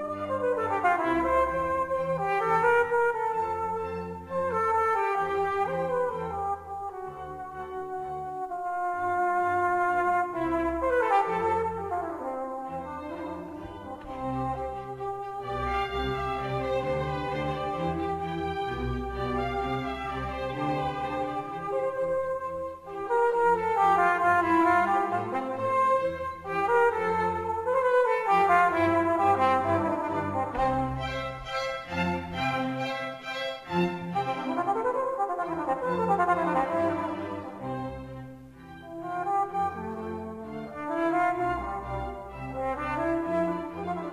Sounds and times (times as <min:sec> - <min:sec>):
Trombone: 0:00.0 - 0:16.5, 0:20.6 - 0:31.2
Cello: 0:00.0 - 0:44.1
Trumpet: 0:00.0 - 0:44.1.